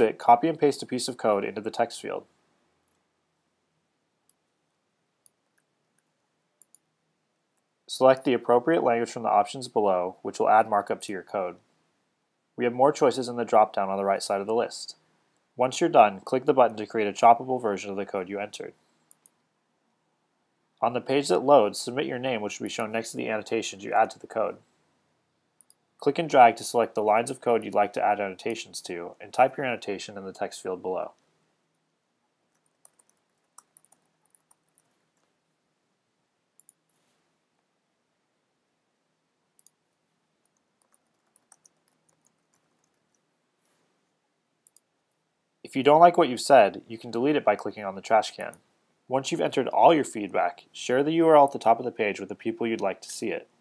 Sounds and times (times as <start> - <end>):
Speech: 0.0 - 2.3, 7.9 - 11.6, 12.6 - 15.0, 15.6 - 18.8, 20.8 - 24.6, 26.0 - 31.2, 45.7 - 53.5.